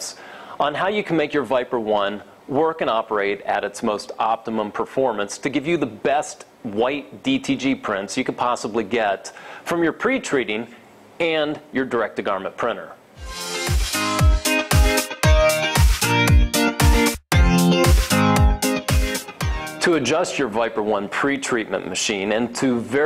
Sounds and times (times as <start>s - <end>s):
Speech: 0.0s - 13.0s, 19.8s - 23.0s
Music: 13.2s - 20.2s.